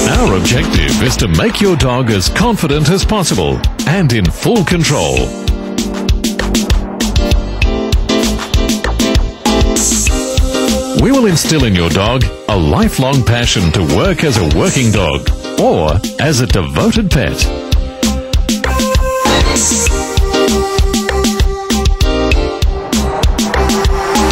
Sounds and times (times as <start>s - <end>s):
Speech: 0.0s - 5.4s, 11.0s - 17.6s
Music: 0.0s - 24.3s.